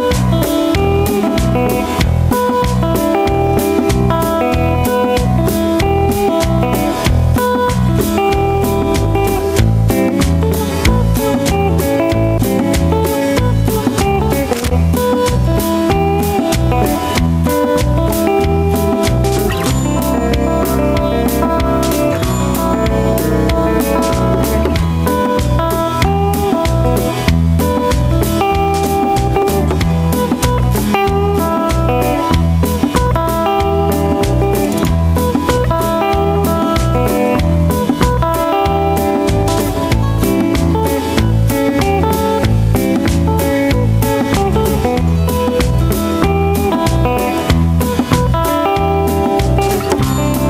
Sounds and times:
Music: 0:00.0 - 0:50.4.

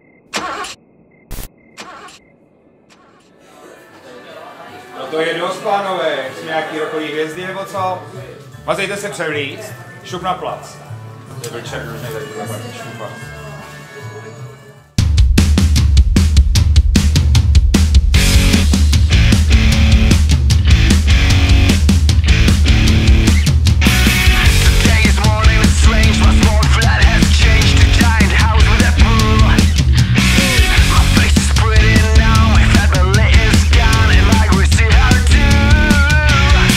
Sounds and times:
Speech: 0:03.4 - 0:14.8
Music: 0:03.4 - 0:36.7.

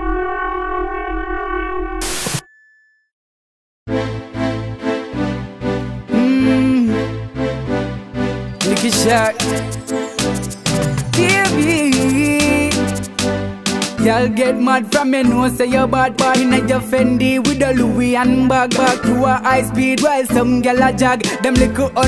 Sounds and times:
Music: 0:03.9 - 0:22.0.

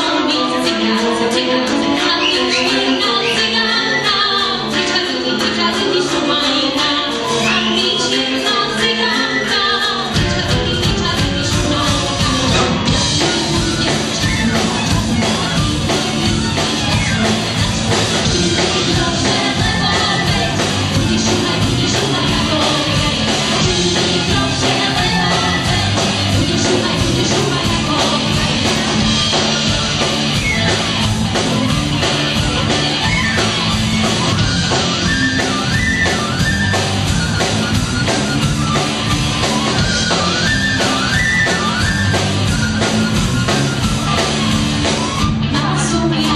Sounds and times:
Music: 0:00.0 - 0:46.3.

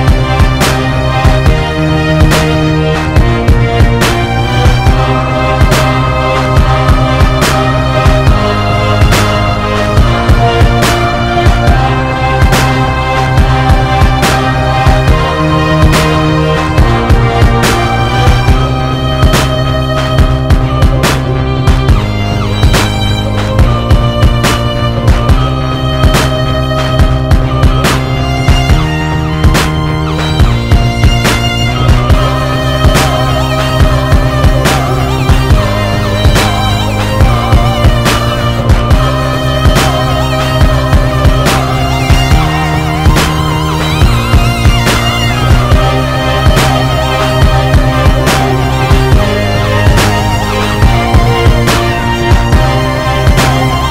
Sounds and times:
Violin, fiddle: 0:00.0 - 0:53.9.

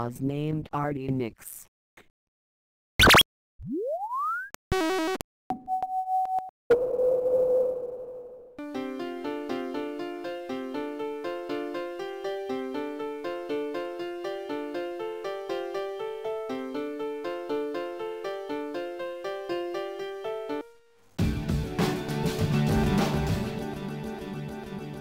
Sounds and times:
Sound effect: 0:03.0 - 0:08.6
Music: 0:08.6 - 0:25.0.

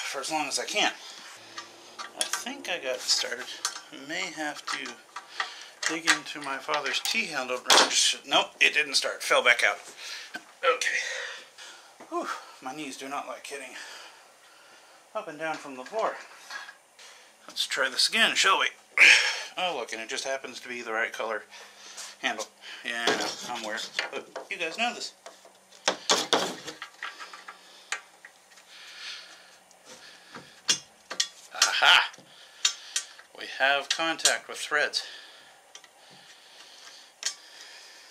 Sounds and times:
Speech: 0:00.0 - 0:01.0, 0:02.2 - 0:05.0, 0:05.8 - 0:09.8, 0:12.1 - 0:13.9, 0:15.2 - 0:16.2, 0:17.5 - 0:18.8, 0:19.6 - 0:21.5, 0:22.2 - 0:25.2, 0:31.6 - 0:32.1, 0:33.4 - 0:35.2.

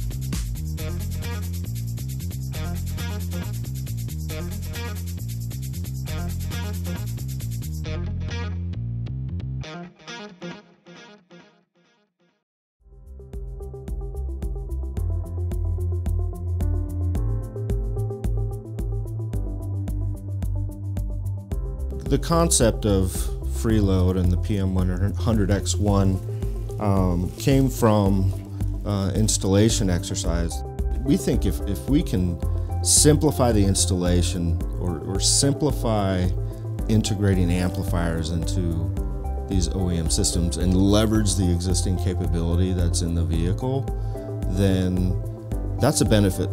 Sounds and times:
Music: 0:00.0 - 0:46.5
Speech: 0:22.0 - 0:26.2, 0:26.8 - 0:43.9, 0:44.5 - 0:45.2, 0:45.8 - 0:46.5.

